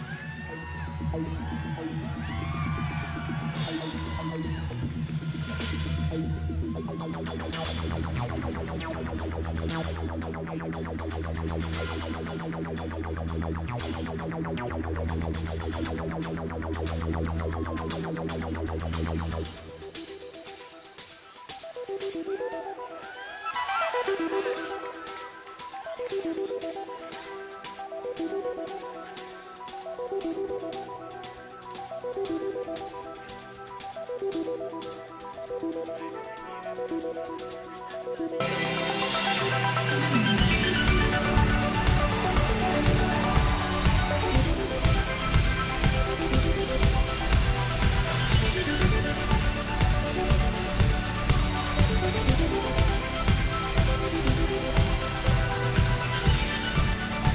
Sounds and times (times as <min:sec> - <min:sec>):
Music: 0:00.0 - 0:57.3.